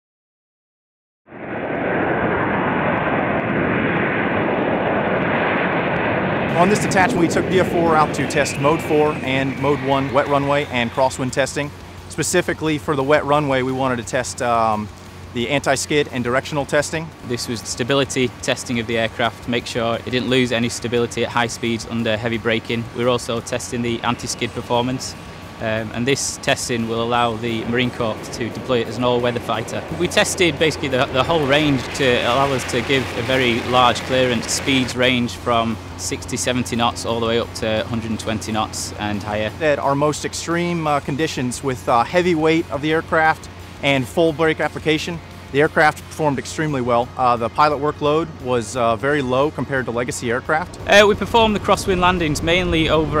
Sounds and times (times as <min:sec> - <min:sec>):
Fixed-wing aircraft, airplane: 0:01.3 - 0:53.2
Speech: 0:06.5 - 0:53.2.